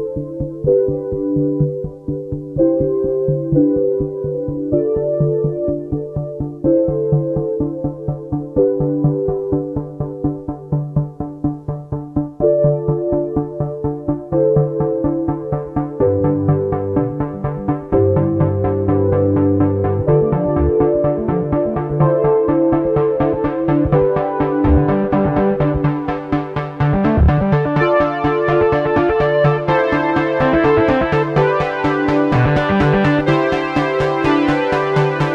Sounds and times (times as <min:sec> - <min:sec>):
Music: 0:00.0 - 0:35.3.